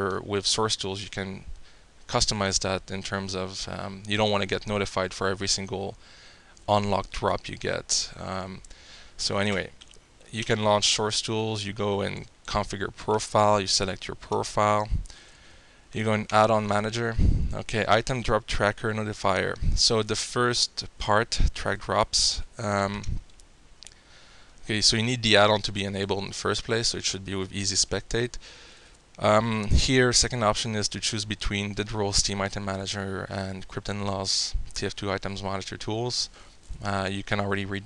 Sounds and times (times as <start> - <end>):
Speech: 0.0 - 1.5, 2.1 - 6.0, 6.7 - 8.6, 9.2 - 15.0, 15.9 - 23.2, 24.6 - 28.4, 29.2 - 37.8.